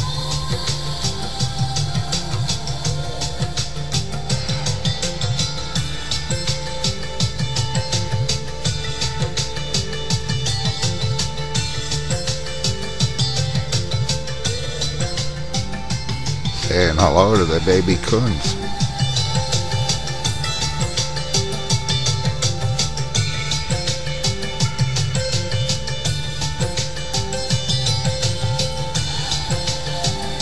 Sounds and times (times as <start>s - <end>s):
Music: 0.0s - 30.4s
Speech: 16.6s - 18.7s.